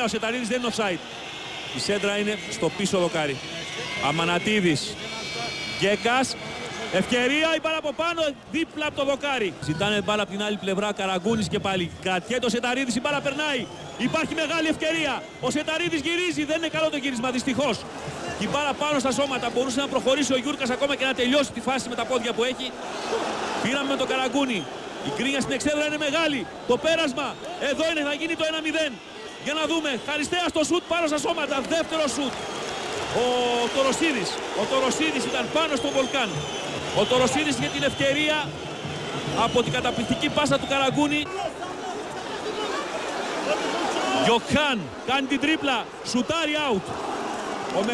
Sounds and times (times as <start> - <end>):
Speech: 0.0 - 1.0, 1.8 - 3.4, 4.0 - 22.7, 23.6 - 32.3, 33.1 - 36.4, 37.0 - 38.5, 39.4 - 42.8, 43.5 - 46.8.